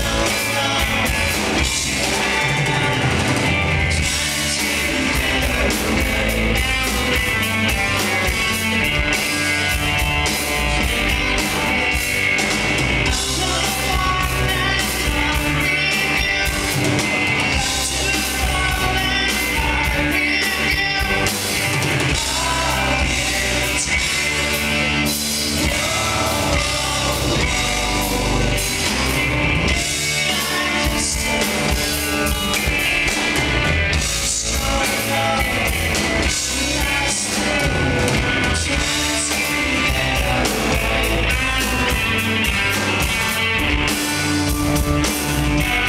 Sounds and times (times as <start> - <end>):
Music: 0.0 - 45.8.